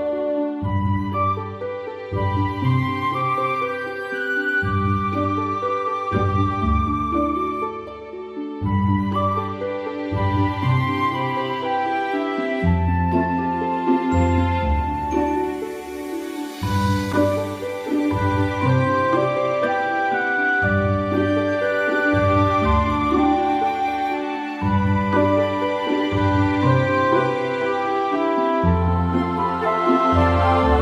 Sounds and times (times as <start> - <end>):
Music: 0.0 - 30.8.